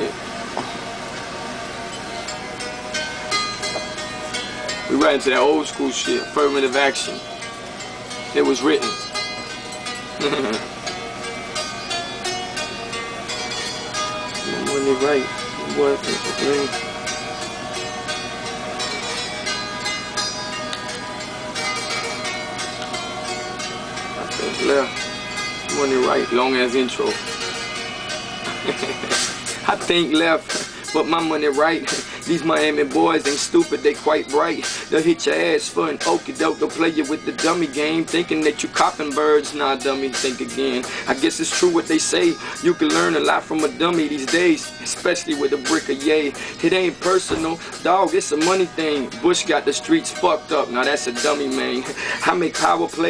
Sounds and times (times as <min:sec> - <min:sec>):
Music: 0:00.0 - 0:53.1
Speech: 0:08.4 - 0:09.0, 0:14.5 - 0:16.7, 0:25.7 - 0:27.2.